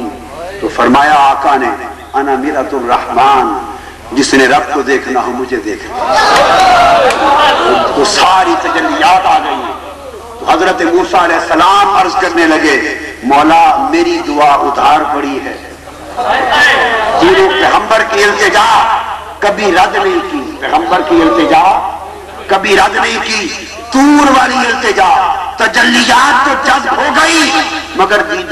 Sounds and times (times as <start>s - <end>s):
Male speech, man speaking: 0.0s - 6.0s, 7.6s - 9.8s, 10.4s - 15.8s, 16.4s - 28.5s
Narration, monologue: 0.0s - 6.1s, 7.6s - 28.5s.